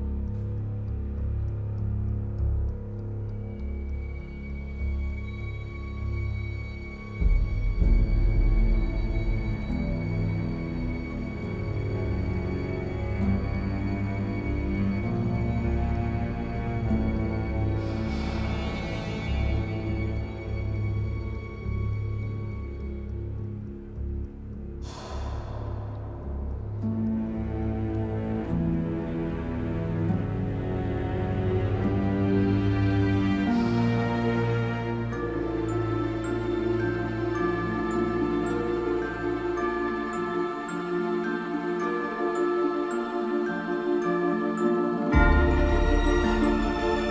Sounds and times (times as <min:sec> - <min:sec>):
Music: 0:00.0 - 0:47.1.